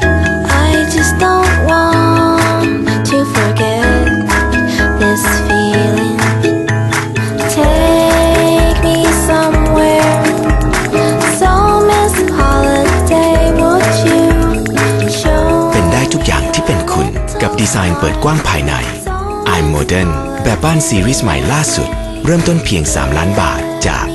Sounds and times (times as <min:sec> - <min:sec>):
Music: 0:00.0 - 0:24.1
Speech: 0:15.7 - 0:24.1.